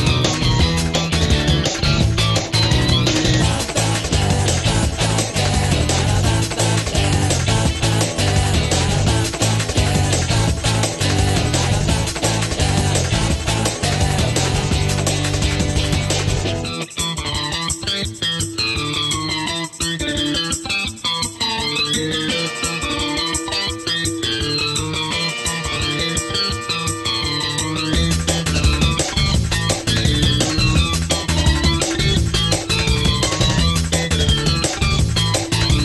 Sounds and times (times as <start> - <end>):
Music: 0.0 - 35.8.